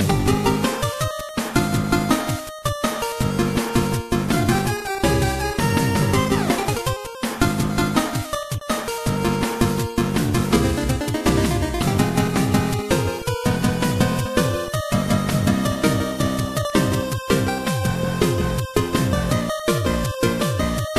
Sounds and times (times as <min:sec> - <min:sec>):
Video game music: 0:00.0 - 0:20.9.